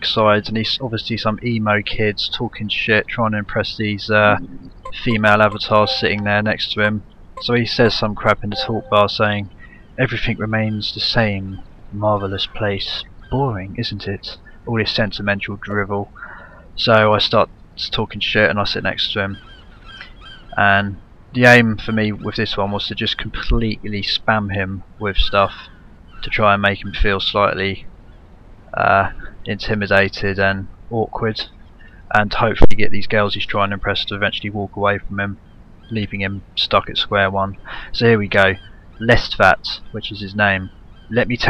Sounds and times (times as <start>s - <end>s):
Speech: 0.0s - 19.4s, 20.6s - 27.9s, 28.7s - 31.5s, 32.1s - 41.5s.